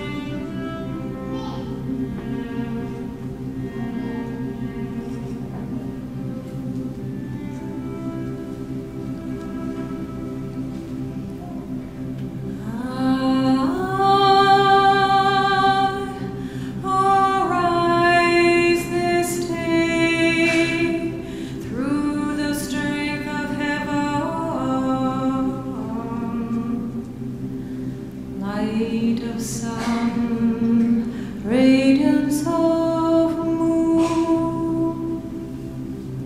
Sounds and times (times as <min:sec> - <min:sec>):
Musical instrument: 0:00.0 - 0:27.4.